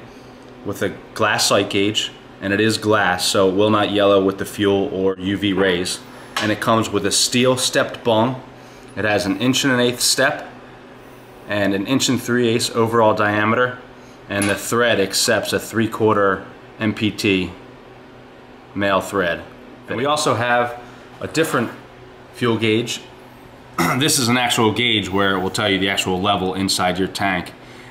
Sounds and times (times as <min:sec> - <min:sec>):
Speech: 0:00.6 - 0:10.6, 0:11.5 - 0:17.6, 0:18.7 - 0:23.2, 0:23.8 - 0:27.6.